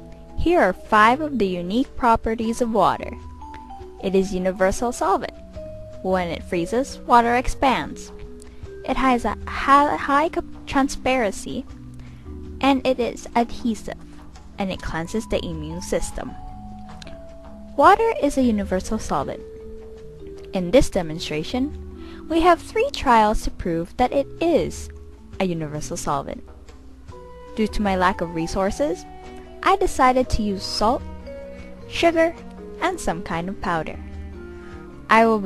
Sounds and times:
Music: 0.0 - 35.4
Speech: 0.4 - 3.2, 4.0 - 5.3, 6.0 - 8.1, 8.9 - 11.6, 12.6 - 14.0, 14.6 - 16.4, 17.8 - 19.4, 20.6 - 21.7, 22.3 - 26.4, 27.6 - 29.0, 29.6 - 31.0, 31.9 - 34.0, 35.1 - 35.4.

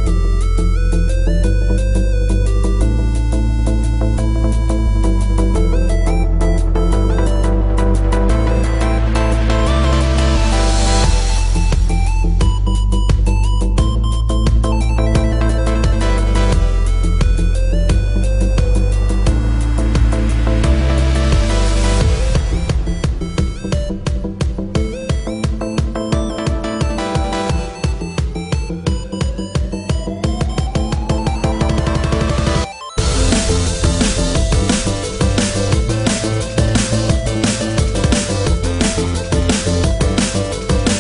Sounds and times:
Electronica: 0.0 - 41.0
House music: 0.0 - 41.0
Trance music: 0.0 - 41.0
Electronic dance music: 2.8 - 41.0.

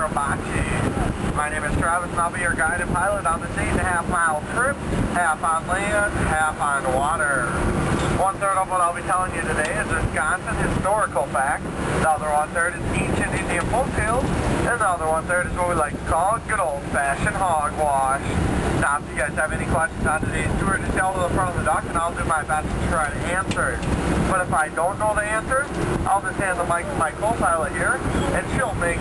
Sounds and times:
Speech: 0.0 - 29.0.

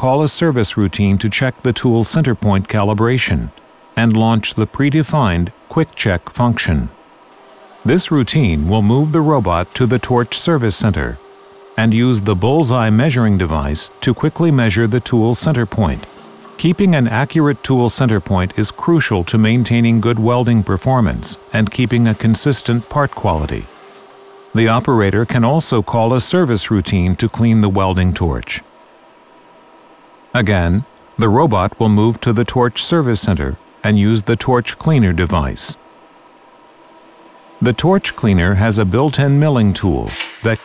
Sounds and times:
Speech: 0.0 - 7.0, 7.8 - 11.2, 11.8 - 23.7, 24.6 - 28.7, 30.4 - 35.8, 37.6 - 40.6.

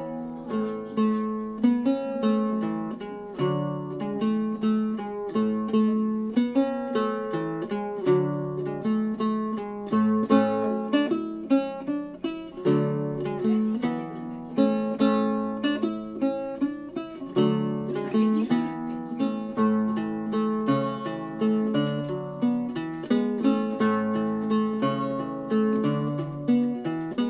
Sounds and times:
Acoustic guitar: 0.0 - 27.3
Mandolin: 0.0 - 27.3.

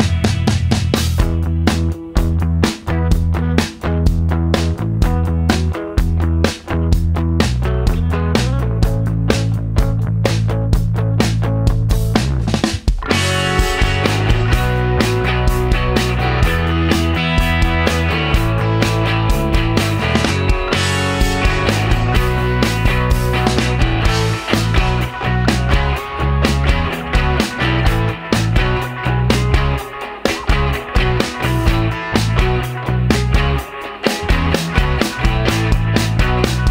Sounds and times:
Music: 0.0 - 36.7.

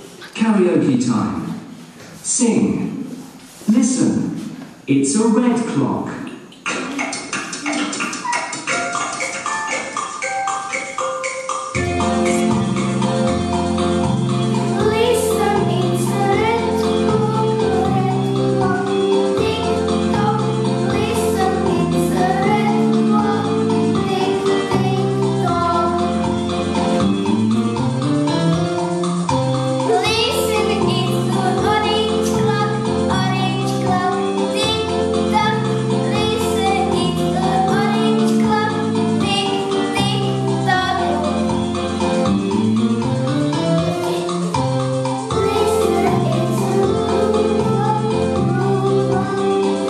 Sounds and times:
Music: 6.0 - 49.8.

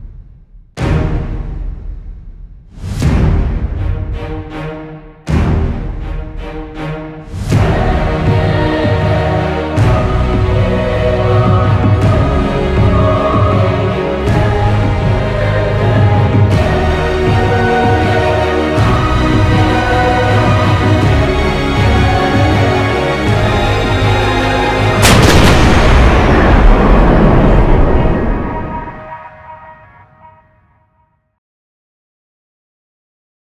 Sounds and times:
Music: 0.0 - 31.4.

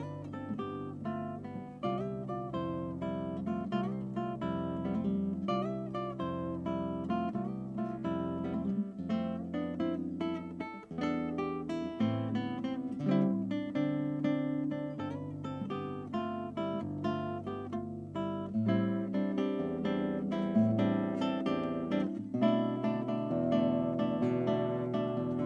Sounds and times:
Acoustic guitar: 0.0 - 25.4.

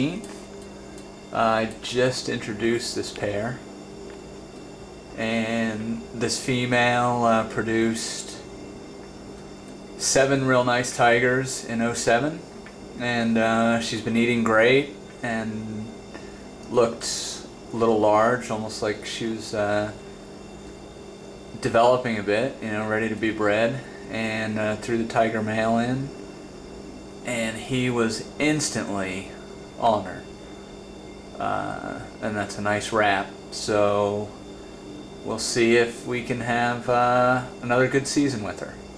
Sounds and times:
Speech: 0.0 - 0.4, 1.3 - 3.7, 5.2 - 8.5, 10.0 - 16.0, 16.7 - 20.0, 21.6 - 26.2, 27.2 - 30.3, 31.4 - 34.4, 35.2 - 38.8
Inside, small room: 0.0 - 38.9.

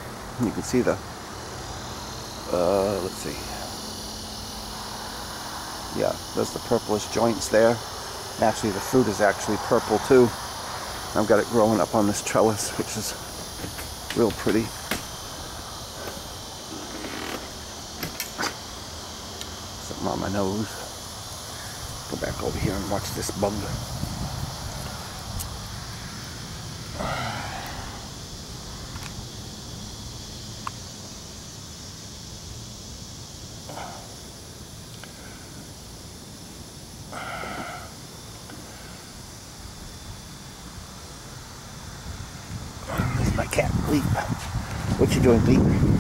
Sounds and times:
Hiss: 0.0 - 46.0.

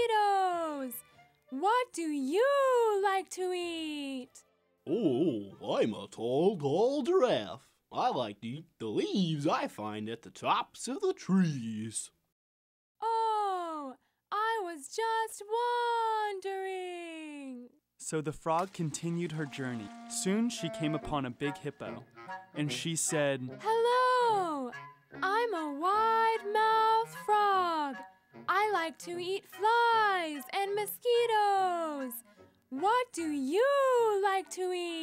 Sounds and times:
Speech: 0.0 - 1.0, 1.6 - 12.2, 13.0 - 22.0, 22.6 - 32.2, 32.8 - 35.0.

